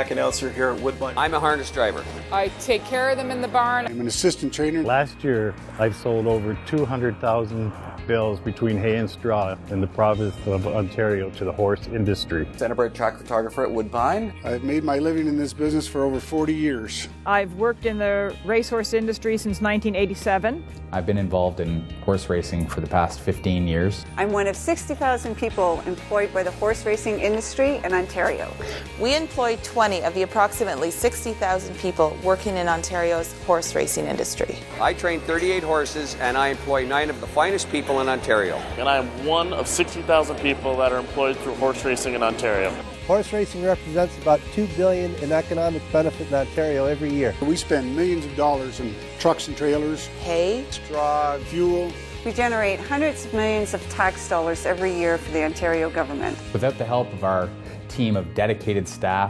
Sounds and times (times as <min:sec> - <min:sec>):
Music: 0:00.0 - 0:59.2.